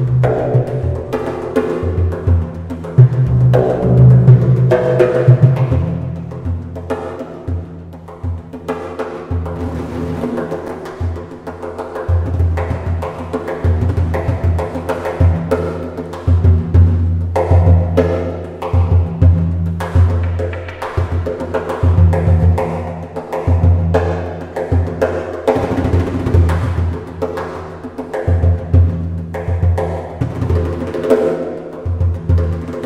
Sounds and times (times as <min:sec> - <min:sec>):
Drum: 0:00.0 - 0:32.8.